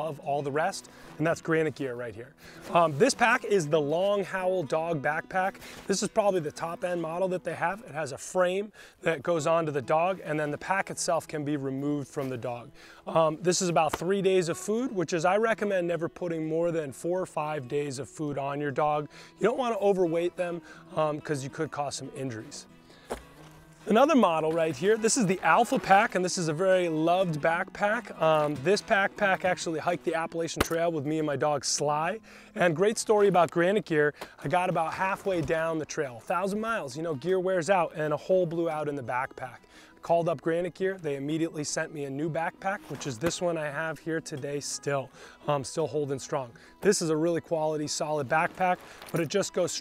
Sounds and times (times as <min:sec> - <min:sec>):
Speech: 0:00.0 - 0:22.7, 0:23.9 - 0:49.8
Music: 0:00.0 - 0:49.8.